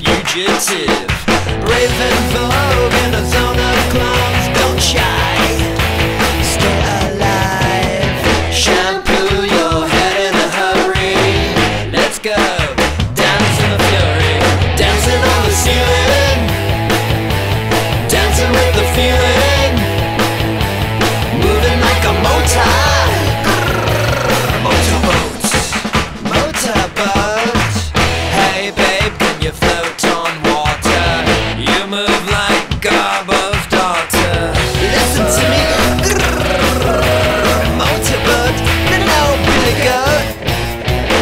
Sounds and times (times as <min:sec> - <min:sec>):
Progressive rock: 0:01.1 - 0:32.5, 0:33.7 - 0:41.2.